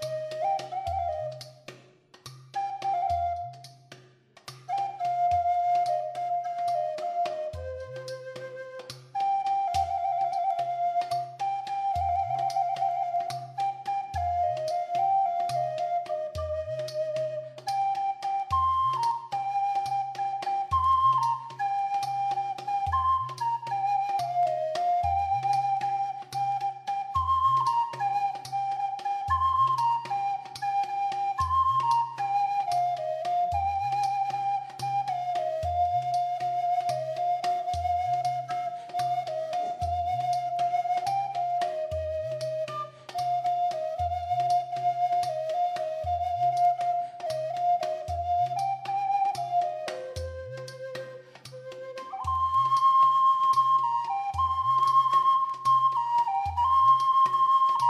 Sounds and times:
Flute: 0:00.0 - 0:57.8.

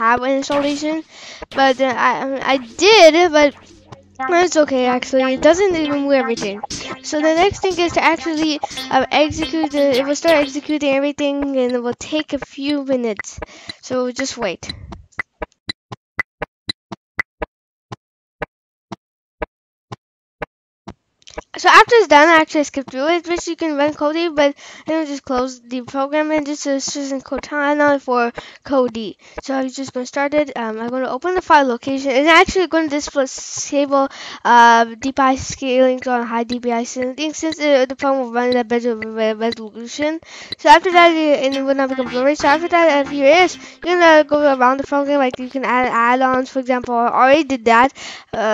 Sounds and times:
Speech: 0:00.0 - 0:03.6, 0:04.2 - 0:14.8, 0:21.5 - 0:48.5.

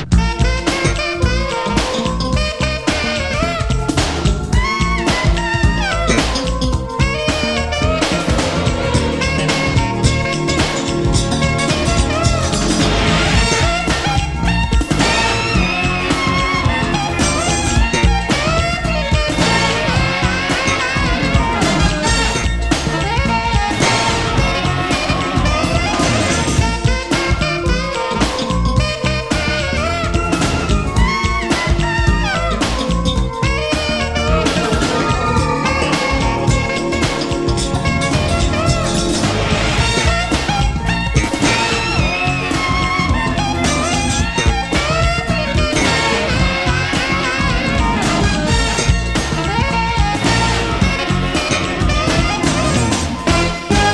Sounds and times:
Music: 0:00.0 - 0:53.9.

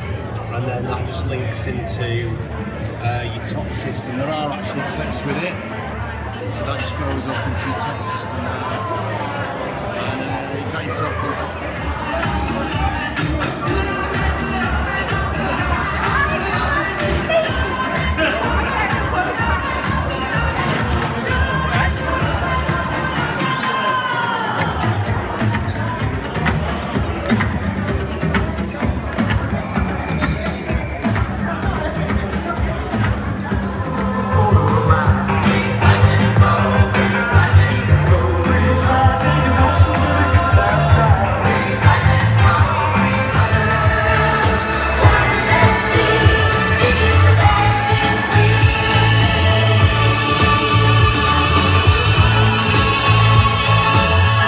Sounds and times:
Inside, large room or hall: 0:00.0 - 0:54.4
Music: 0:00.0 - 0:54.4.

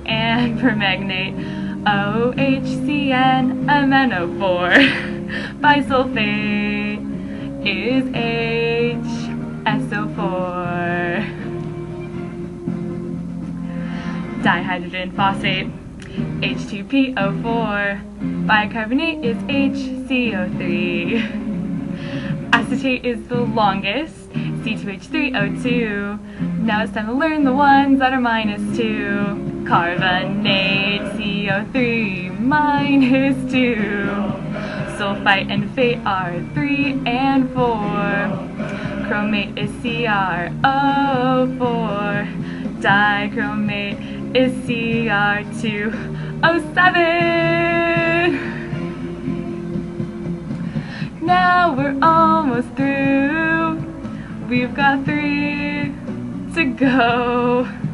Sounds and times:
Inside, small room: 0:00.0 - 0:57.9
Music: 0:00.0 - 0:57.9.

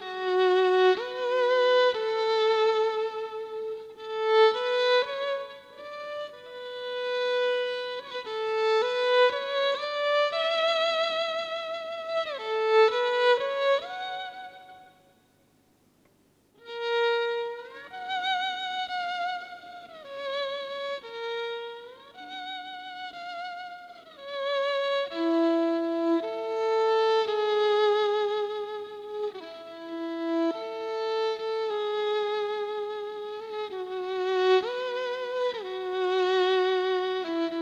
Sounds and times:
Violin, fiddle: 0:00.0 - 0:15.2, 0:16.6 - 0:37.6.

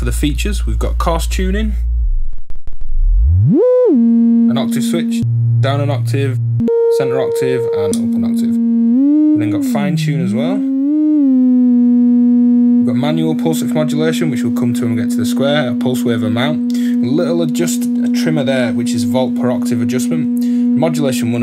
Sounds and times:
Speech: 0:00.0 - 0:01.8, 0:04.5 - 0:08.6, 0:09.4 - 0:10.7, 0:12.9 - 0:21.4.

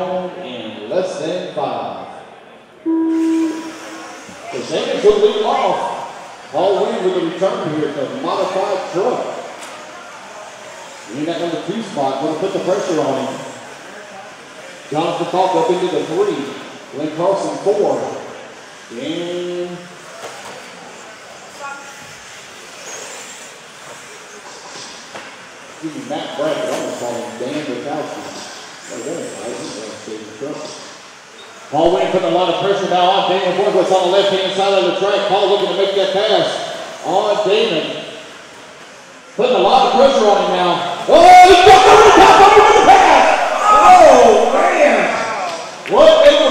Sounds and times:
Speech: 0:04.5 - 0:09.5, 0:11.1 - 0:13.6, 0:25.8 - 0:30.9, 0:31.7 - 0:38.1, 0:39.4 - 0:46.5.

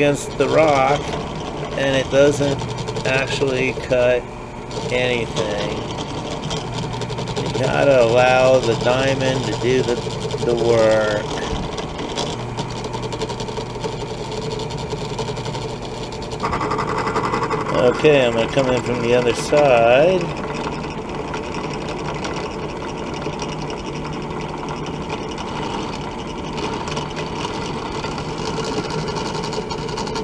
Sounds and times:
Drill: 0:00.0 - 0:30.2.

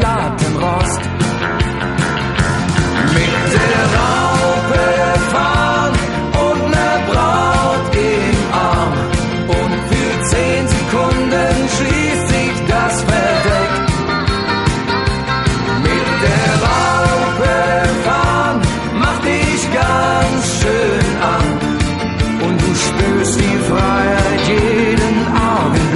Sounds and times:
Rock and roll: 0:00.0 - 0:25.9.

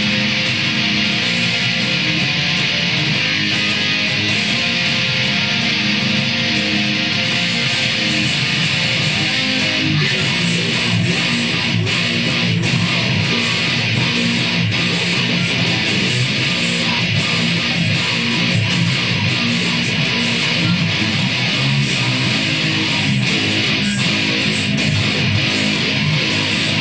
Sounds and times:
Electric guitar: 0:00.0 - 0:26.8.

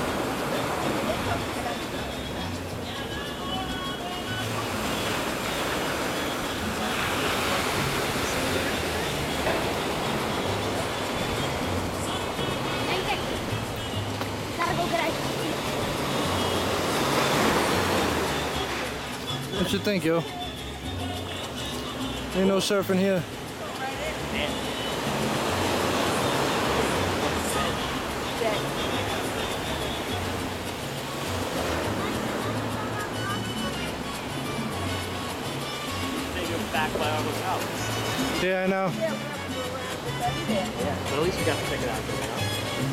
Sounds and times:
Music: 0:00.0 - 0:42.9.

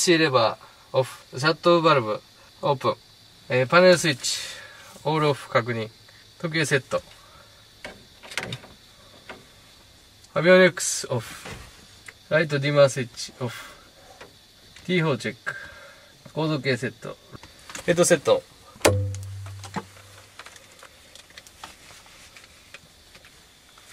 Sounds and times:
Speech: 0:00.0 - 0:07.1, 0:10.3 - 0:11.6, 0:12.3 - 0:13.8, 0:14.8 - 0:15.6, 0:16.3 - 0:18.5.

